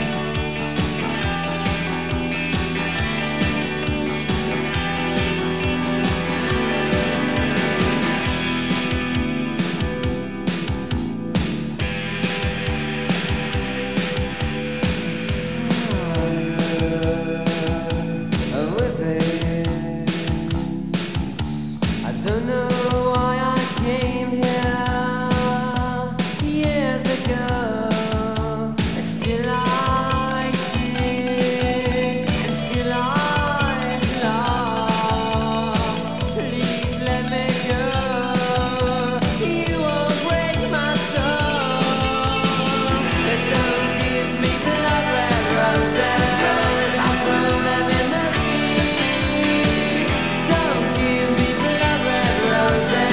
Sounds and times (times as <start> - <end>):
Music: 0.0 - 53.1.